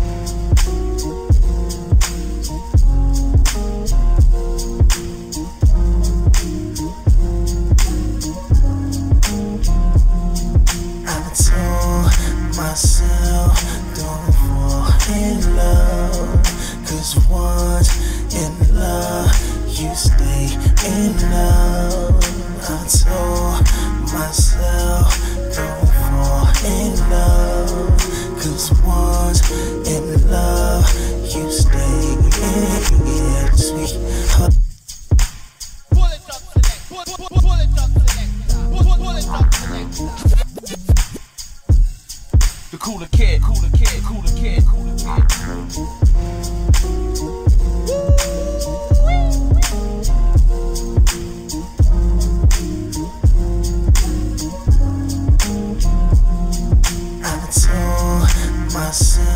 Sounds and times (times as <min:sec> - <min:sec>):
Music: 0:00.0 - 0:59.3.